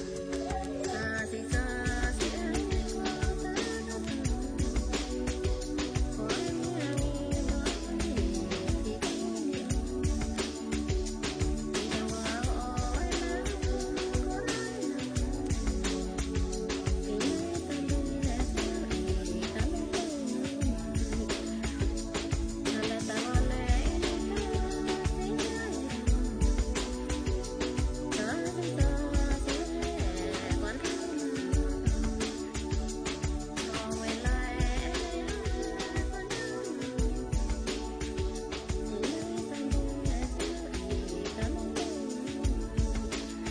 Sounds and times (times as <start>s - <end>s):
Music: 0.0s - 43.5s.